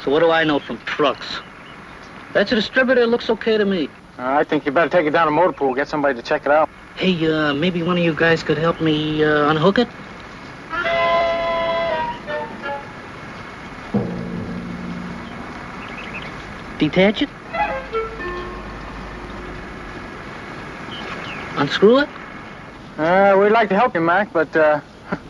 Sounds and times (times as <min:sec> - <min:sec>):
Speech: 0:00.0 - 0:01.5, 0:02.4 - 0:10.0, 0:23.0 - 0:24.9.